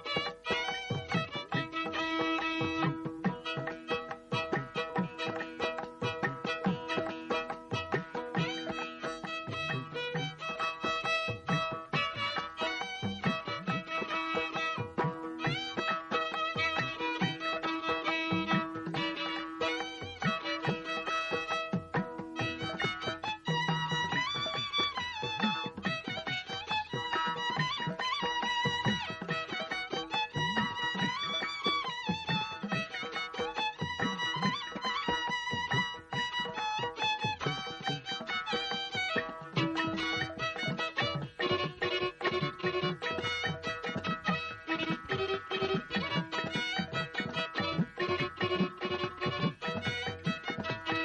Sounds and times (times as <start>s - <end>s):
Violin, fiddle: 0.0s - 51.0s.